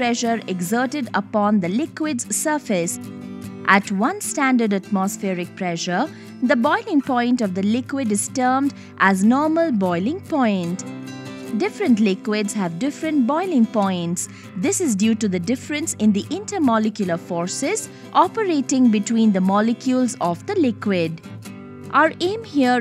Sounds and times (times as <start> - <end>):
Speech: 0.0 - 3.0, 3.7 - 10.8, 11.6 - 21.2, 22.0 - 22.8
Music: 0.0 - 22.8.